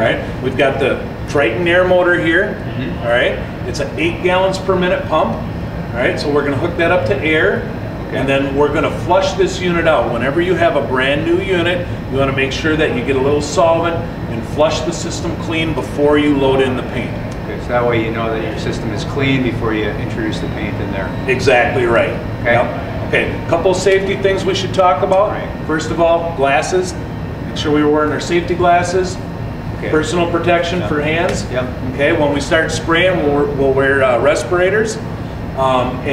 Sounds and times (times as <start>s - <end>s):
Speech: 0.0s - 35.0s, 35.6s - 36.1s.